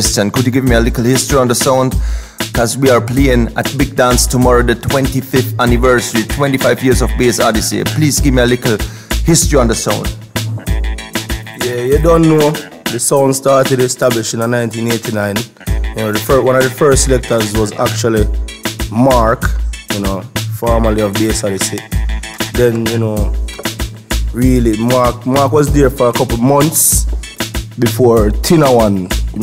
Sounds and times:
Speech: 0.0s - 2.0s, 2.6s - 10.2s, 11.6s - 18.3s, 18.9s - 21.9s, 22.5s - 23.4s, 24.3s - 27.1s, 27.8s - 29.4s
Music: 0.0s - 29.4s.

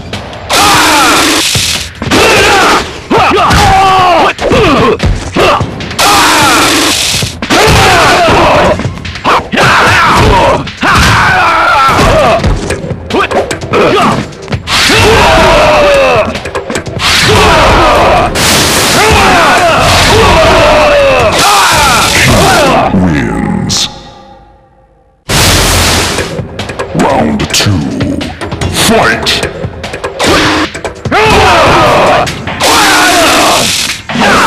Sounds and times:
Music: 0.0s - 34.4s
Speech: 20.8s - 24.1s, 27.0s - 29.5s.

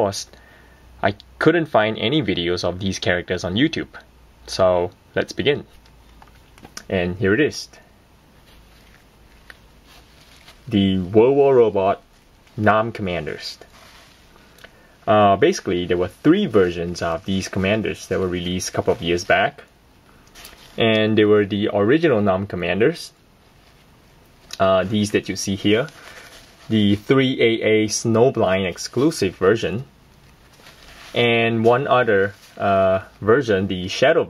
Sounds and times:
Speech: 0.0s - 0.4s, 1.0s - 5.8s, 6.8s - 7.9s, 10.7s - 12.0s, 12.6s - 13.7s, 15.1s - 19.7s, 20.8s - 23.2s, 24.5s - 26.0s, 26.7s - 29.9s, 31.1s - 34.3s.

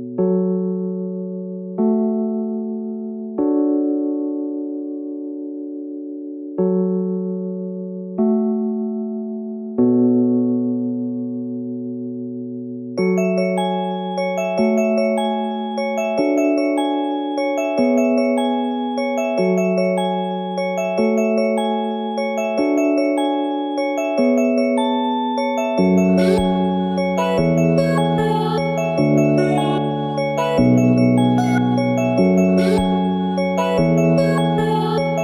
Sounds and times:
Glockenspiel: 13.0s - 35.2s
Lullaby: 13.0s - 35.2s.

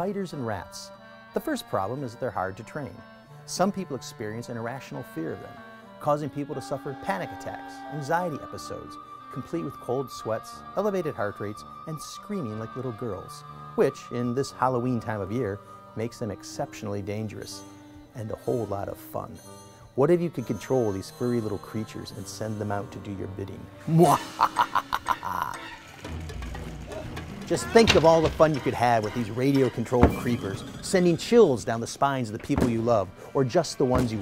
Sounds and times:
Speech: 0.0s - 17.6s, 18.2s - 19.4s, 20.0s - 24.2s, 27.5s - 34.2s
Music: 0.0s - 34.2s.

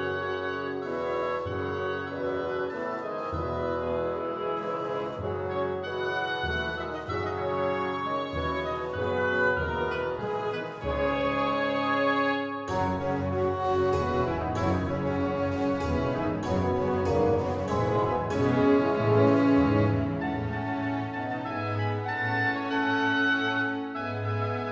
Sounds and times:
Tender music: 0.0s - 24.7s.

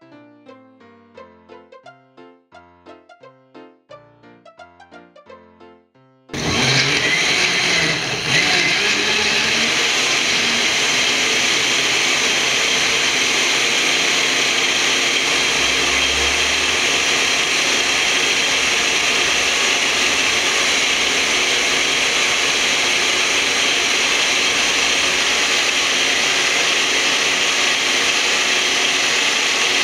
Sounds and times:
Blender: 6.4s - 29.8s.

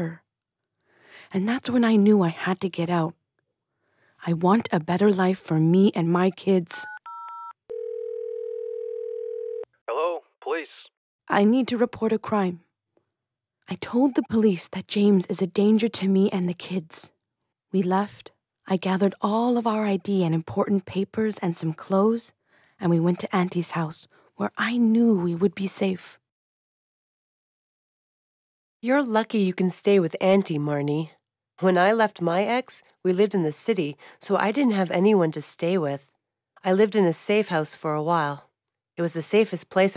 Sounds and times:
Speech: 4.2s - 6.9s, 9.9s - 12.6s, 13.7s - 17.1s, 17.8s - 26.2s
Dial tone: 6.8s - 9.7s.

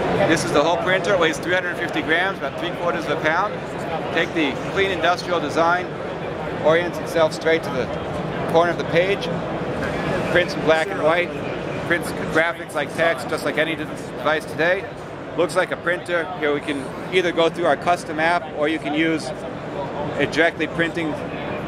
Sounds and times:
Speech: 0.0s - 5.9s, 6.6s - 9.4s, 10.0s - 21.6s.

